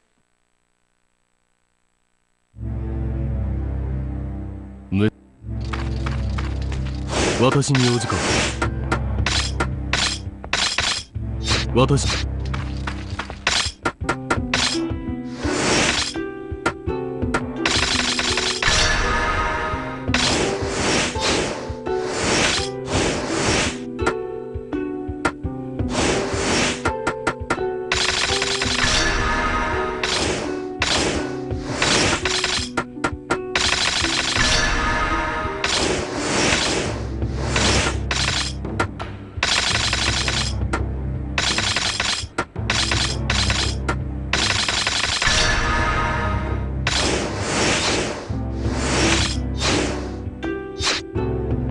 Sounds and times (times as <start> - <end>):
Music: 2.6 - 51.7.